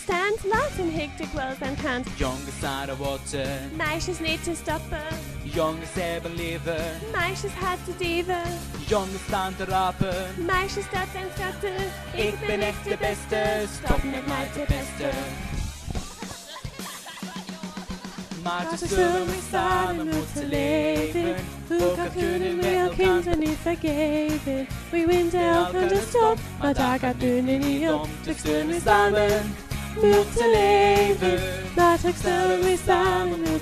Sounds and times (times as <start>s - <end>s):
Female singing: 0.0s - 2.1s, 3.7s - 5.2s, 7.0s - 8.6s, 10.4s - 15.4s, 17.1s - 33.6s
Male singing: 2.1s - 3.8s, 5.4s - 7.2s, 8.8s - 10.5s, 13.3s - 15.4s, 18.3s - 23.5s, 25.4s - 33.6s
Choir: 9.0s - 15.6s, 18.4s - 33.6s.